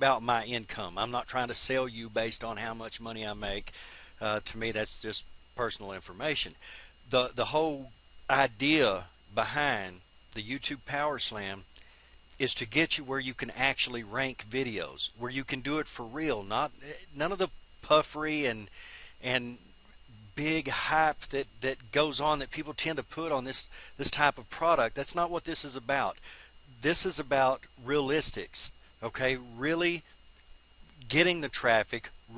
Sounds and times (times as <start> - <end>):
Speech: 0.0 - 11.7, 12.4 - 26.2, 26.8 - 30.1, 31.0 - 32.3.